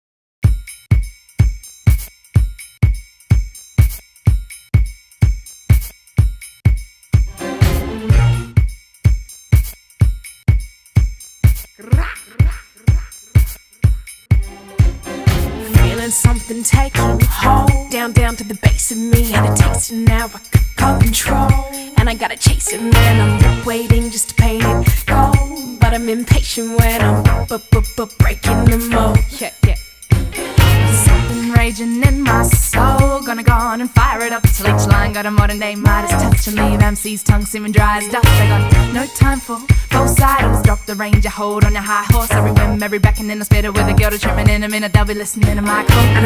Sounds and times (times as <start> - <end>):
Music: 0.4 - 11.8, 12.4 - 46.2.